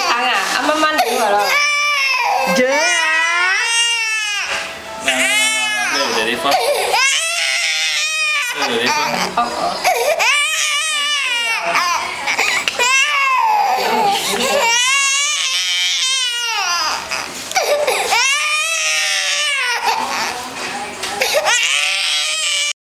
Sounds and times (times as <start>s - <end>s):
Baby cry, infant cry: 1.0s - 20.5s, 21.2s - 22.8s
Speech: 12.9s - 16.8s.